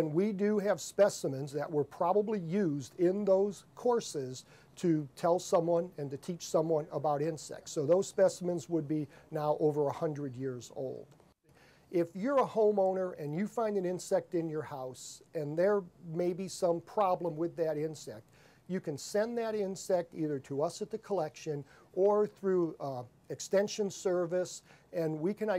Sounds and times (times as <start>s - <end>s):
Speech: 0.0s - 11.2s, 11.9s - 25.5s.